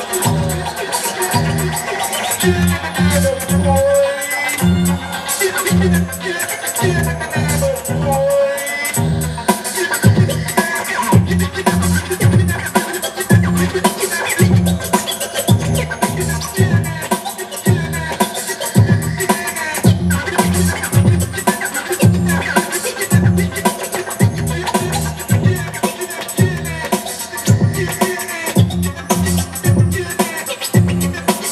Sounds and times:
Electronic music: 0.0s - 31.5s
Scratching (performance technique): 0.0s - 31.5s
Drum kit: 8.9s - 31.5s.

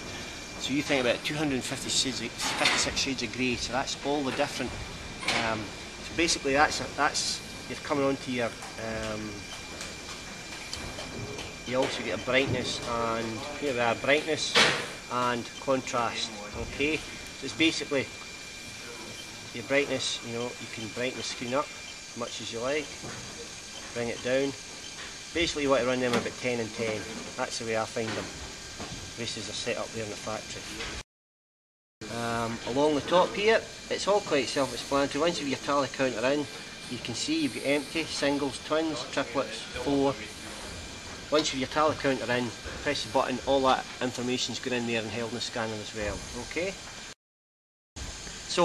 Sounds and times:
Speech: 0.6s - 9.4s, 11.6s - 18.1s, 18.9s - 23.0s, 23.9s - 24.6s, 25.4s - 28.3s, 29.2s - 31.0s, 32.0s - 40.7s, 41.3s - 46.8s.

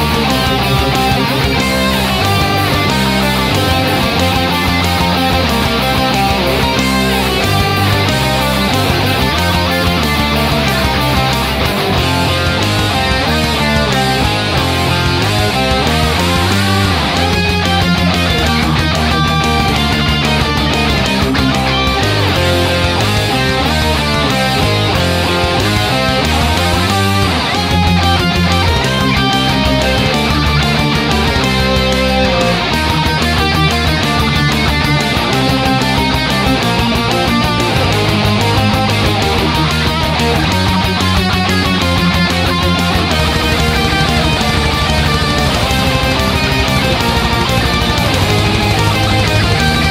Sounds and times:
Electric guitar: 0.0s - 49.9s
Strum: 0.0s - 49.9s.

